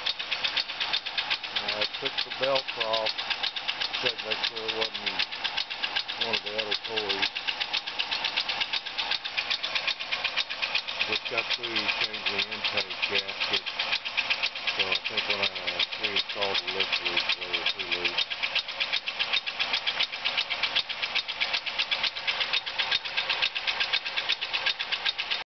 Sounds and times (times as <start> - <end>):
Vibration: 0.0 - 25.4
Speech: 1.6 - 3.1, 4.0 - 5.2, 6.2 - 7.3, 11.1 - 13.7, 14.8 - 18.2.